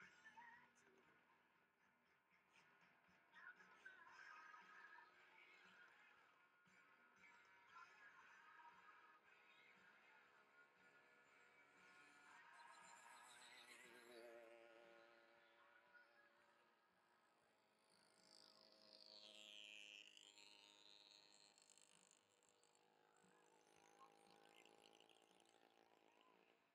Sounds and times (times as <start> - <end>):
Music: 0.0 - 13.8.